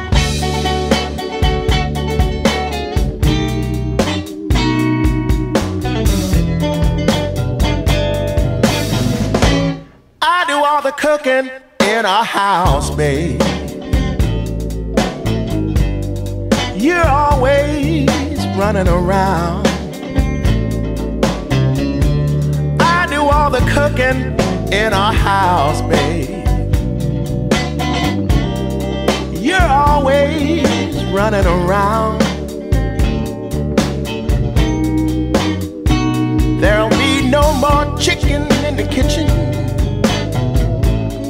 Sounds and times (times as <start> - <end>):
Music: 0.0 - 10.6, 11.6 - 41.3.